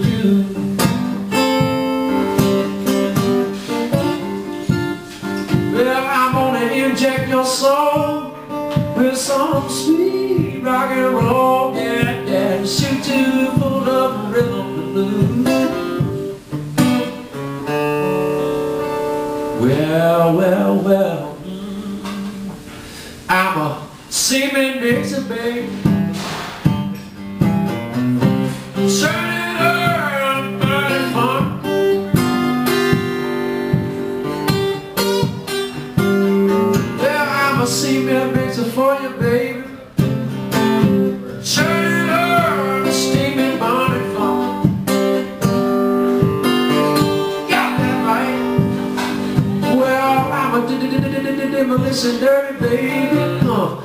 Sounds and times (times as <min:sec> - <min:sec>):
Music: 0:00.0 - 0:53.8.